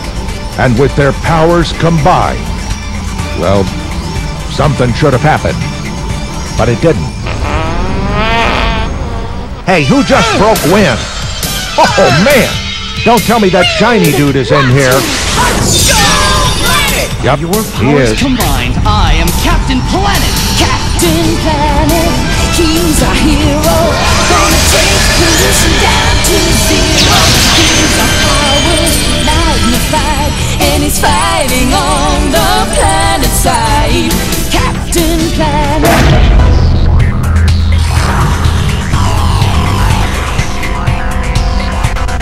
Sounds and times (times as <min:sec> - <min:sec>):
Music: 0:00.0 - 0:42.2.